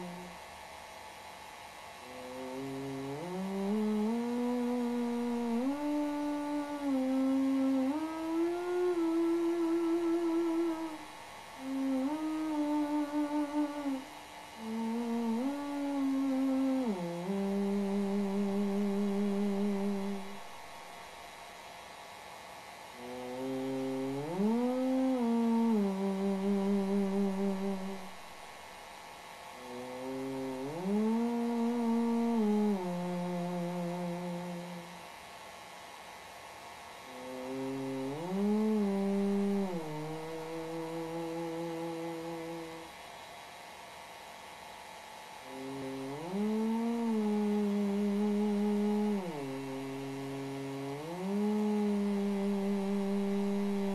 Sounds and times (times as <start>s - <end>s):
Hum: 0.0s - 53.9s
Mains hum: 0.0s - 53.9s.